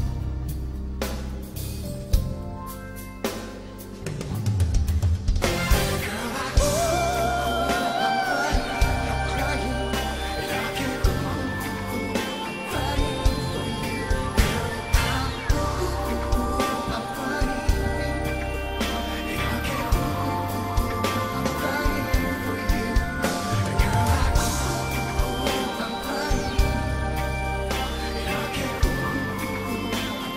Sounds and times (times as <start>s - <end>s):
Music: 0.0s - 30.3s.